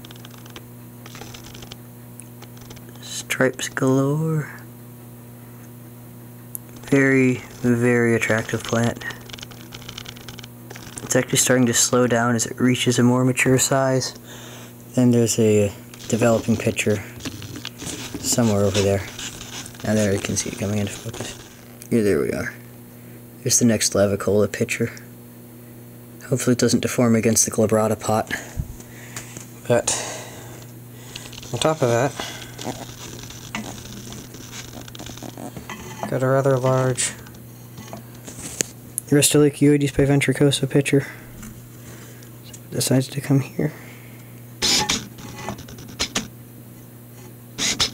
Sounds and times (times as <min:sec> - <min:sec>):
Speech: 0:03.0 - 0:04.7, 0:06.8 - 0:09.2, 0:11.1 - 0:14.2, 0:14.9 - 0:17.1, 0:18.2 - 0:19.1, 0:19.8 - 0:22.6, 0:23.4 - 0:25.1, 0:26.2 - 0:28.5, 0:29.6 - 0:30.0, 0:31.5 - 0:32.2, 0:36.1 - 0:37.3, 0:39.1 - 0:41.2, 0:42.7 - 0:43.8.